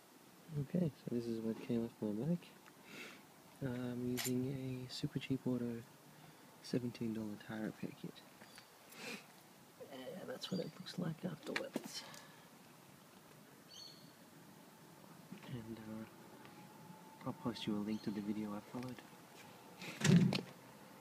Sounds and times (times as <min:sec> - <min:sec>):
Environmental noise: 0:00.0 - 0:21.0
Outside, rural or natural: 0:00.0 - 0:21.0
Speech: 0:00.5 - 0:02.6, 0:03.6 - 0:05.9, 0:06.6 - 0:08.2, 0:09.8 - 0:12.1, 0:15.4 - 0:16.1, 0:17.2 - 0:19.1.